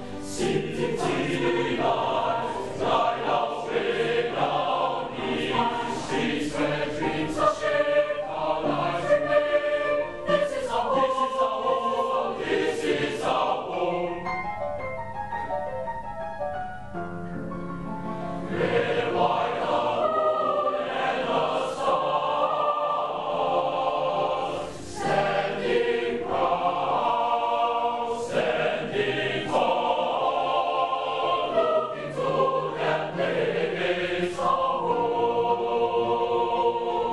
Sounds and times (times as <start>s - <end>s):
Choir: 0.0s - 14.4s, 18.4s - 37.1s.